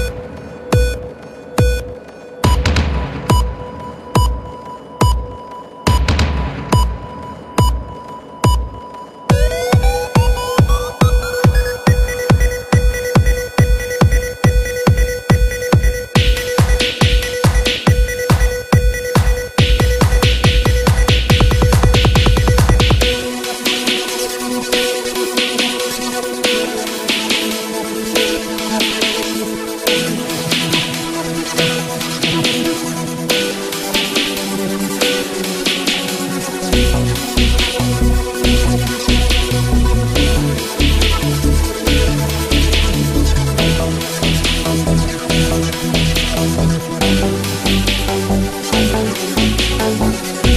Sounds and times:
Techno: 0.0s - 50.5s.

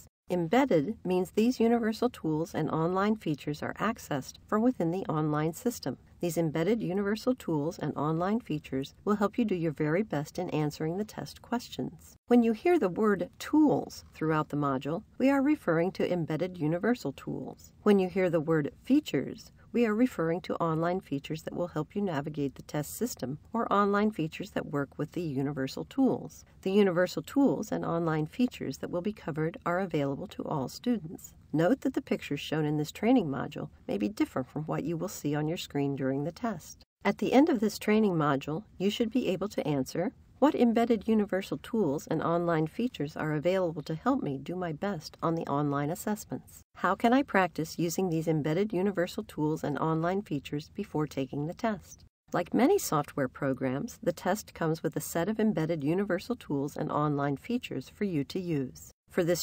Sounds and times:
Speech: 0.0s - 59.4s.

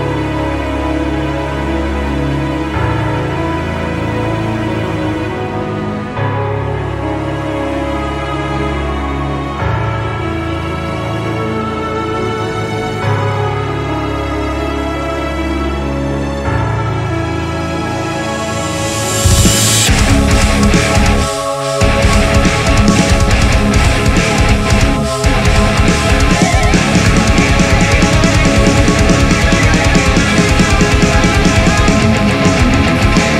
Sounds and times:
Music: 0.0s - 33.3s.

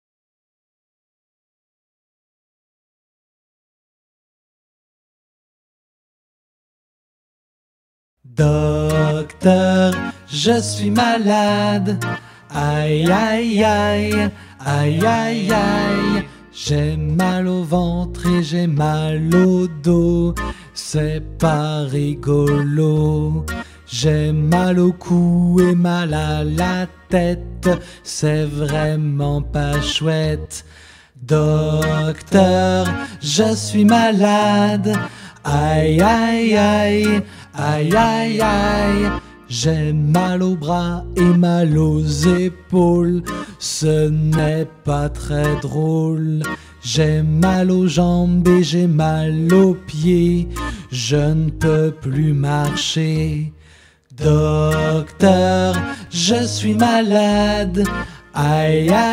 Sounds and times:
Music for children: 8.4s - 59.1s.

